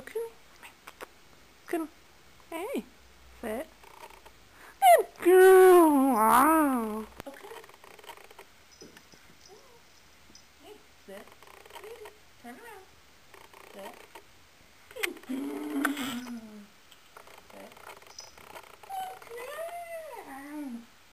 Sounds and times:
Speech: 2.5 - 3.7, 4.8 - 7.6, 10.6 - 12.9, 13.7 - 14.0, 18.9 - 20.8.

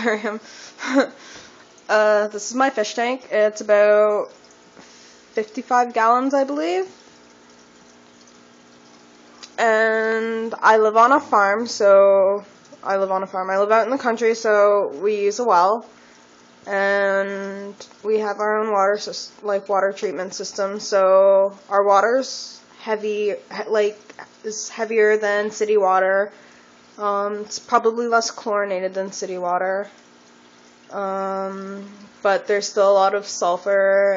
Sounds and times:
Speech: 1.9 - 4.3, 5.4 - 6.9, 9.5 - 15.9, 16.7 - 26.4, 27.0 - 29.9, 30.9 - 34.1.

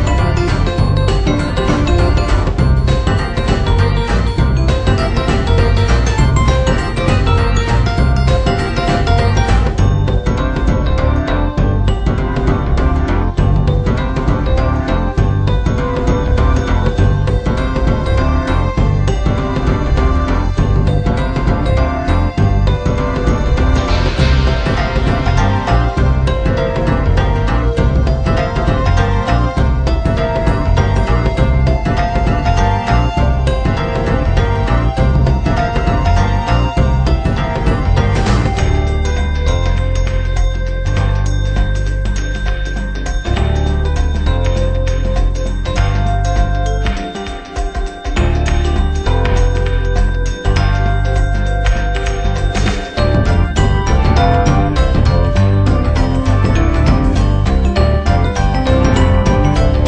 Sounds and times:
Theme music: 0.0 - 59.8.

